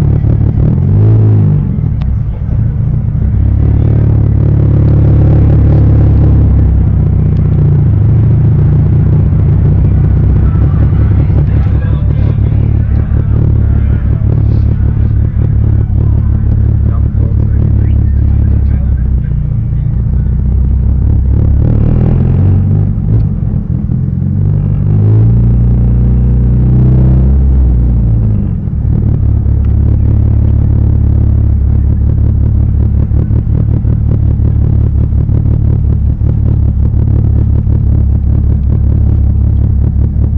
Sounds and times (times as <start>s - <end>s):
Car: 0.0s - 40.3s
Speech: 10.3s - 20.4s.